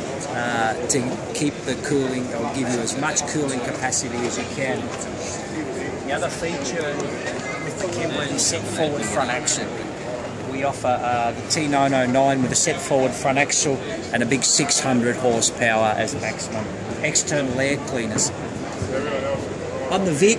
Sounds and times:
Speech: 0:00.2 - 0:20.3.

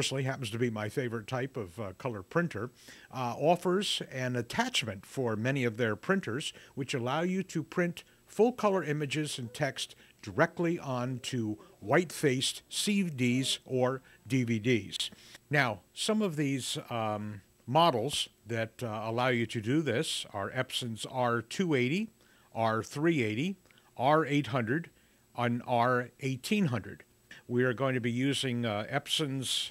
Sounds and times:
Speech: 0:00.0 - 0:29.7.

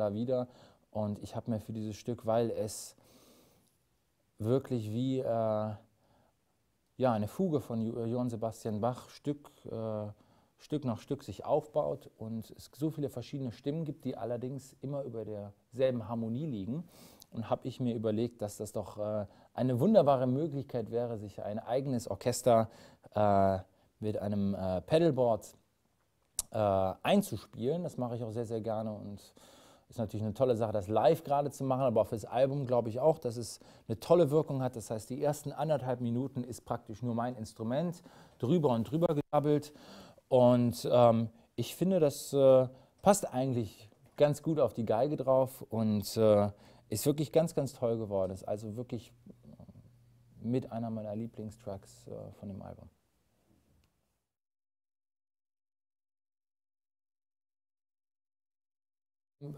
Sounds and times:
Speech: 0:00.0 - 0:03.0, 0:04.4 - 0:05.9, 0:07.0 - 0:25.6, 0:26.4 - 0:49.8, 0:50.4 - 0:53.0.

